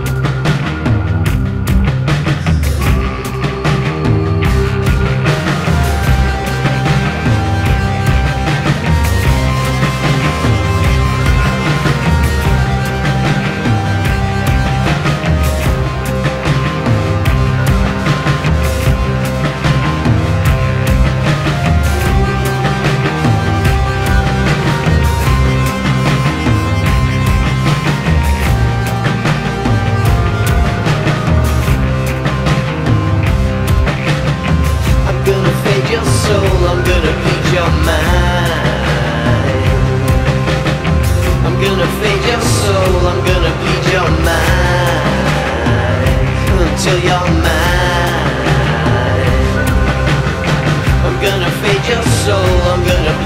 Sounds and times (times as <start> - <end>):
Dance music: 0.0 - 53.2
Independent music: 0.0 - 53.2
Jazz: 0.0 - 53.2
Rhythm and blues: 0.0 - 53.2
Theme music: 0.0 - 53.2.